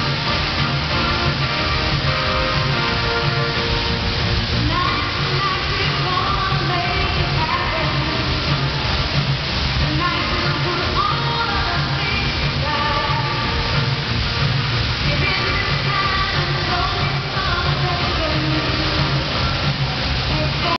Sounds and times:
Music: 0.0 - 20.7.

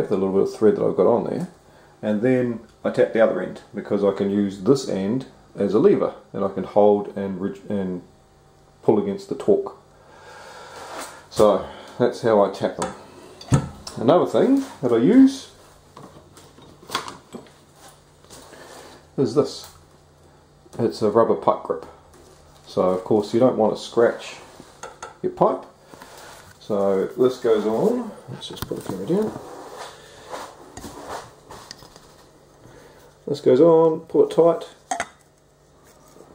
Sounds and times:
Speech: 0.0 - 8.1, 8.8 - 9.8, 11.3 - 13.0, 13.9 - 15.6, 19.2 - 19.8, 20.7 - 22.0, 22.7 - 24.5, 25.2 - 25.8, 26.6 - 29.5, 33.2 - 34.8
Inside, small room: 0.0 - 36.3.

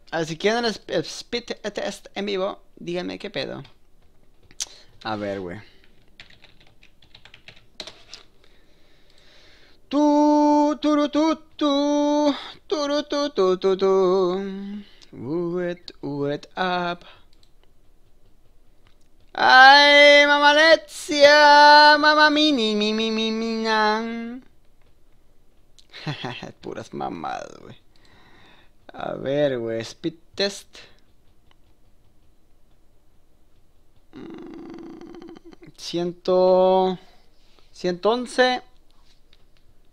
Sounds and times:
Computer keyboard: 3.5 - 8.3, 15.9 - 25.2.

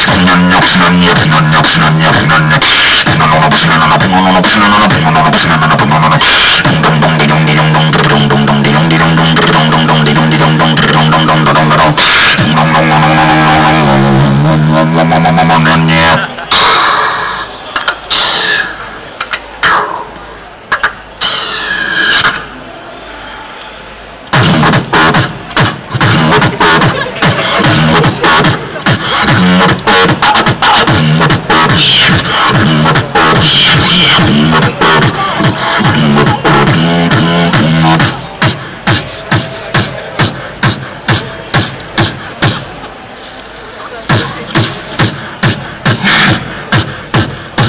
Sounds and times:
Beatboxing: 0.0 - 22.6, 24.2 - 47.6.

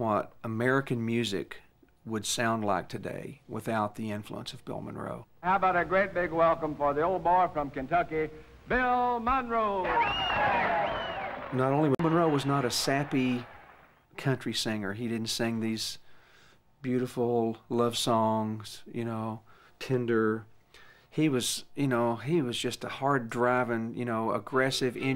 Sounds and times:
Speech: 0.0 - 9.9, 11.5 - 13.5, 14.2 - 16.0, 16.8 - 20.5, 21.2 - 25.1.

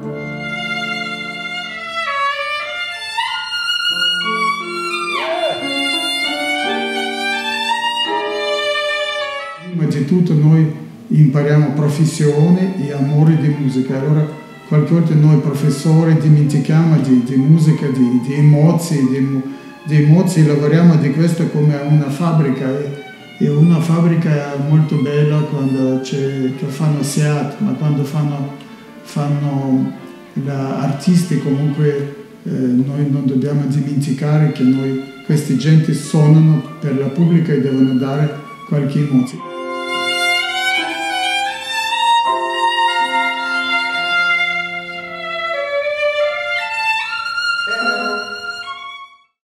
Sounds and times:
Violin, fiddle: 0.0 - 49.4
Speech: 5.2 - 6.1, 9.6 - 39.4, 47.7 - 48.4.

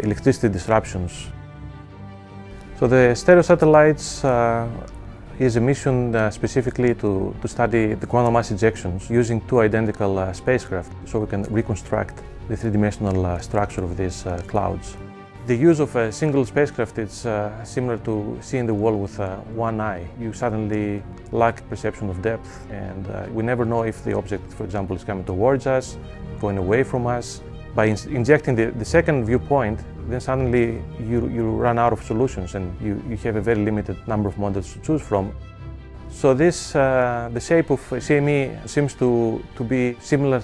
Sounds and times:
Speech: 0.0 - 1.4, 2.8 - 35.4, 36.1 - 40.4
Music: 0.0 - 40.4.

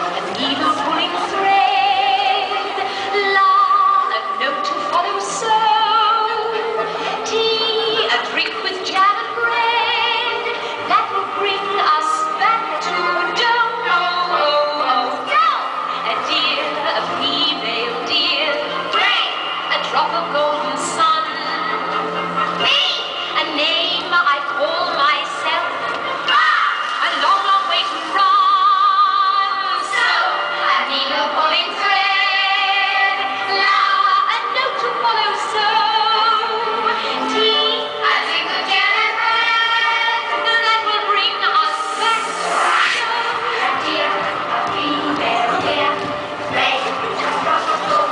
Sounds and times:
Crowd: 0.0 - 48.1
Music: 0.0 - 48.1.

